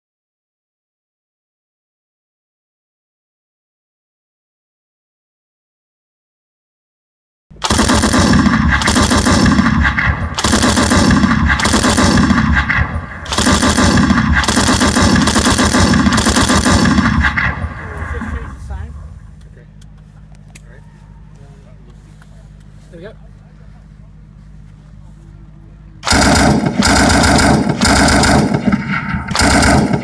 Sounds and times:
Speech: 0:17.8 - 0:19.8, 0:20.6 - 0:24.2.

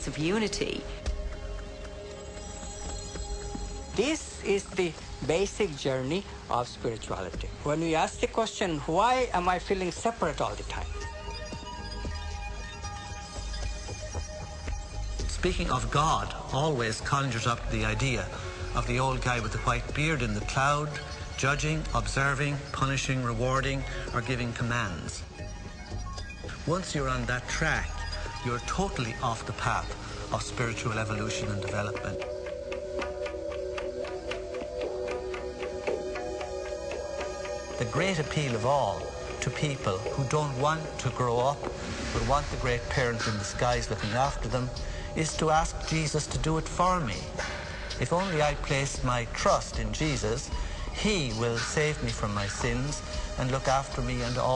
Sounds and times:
Music: 0:00.0 - 0:54.5.

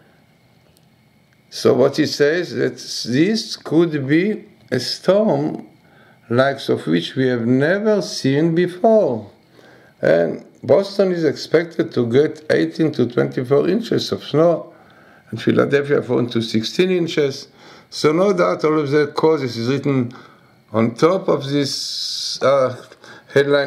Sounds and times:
Speech: 0:01.5 - 0:09.4, 0:10.0 - 0:23.6.

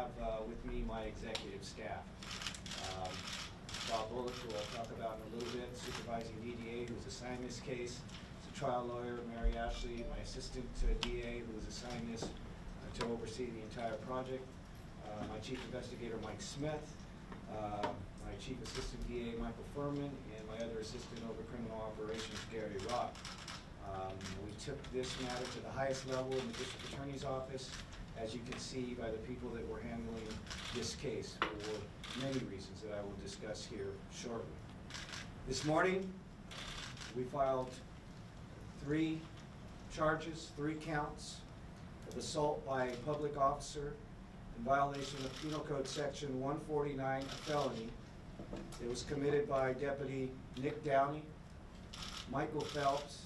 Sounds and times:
Speech: 0:00.0 - 0:02.1, 0:03.8 - 0:16.9, 0:17.5 - 0:23.2, 0:23.8 - 0:34.6, 0:35.5 - 0:36.2, 0:37.1 - 0:37.8, 0:38.8 - 0:39.3, 0:39.9 - 0:44.0, 0:44.6 - 0:48.0, 0:48.8 - 0:51.4, 0:52.3 - 0:53.2.

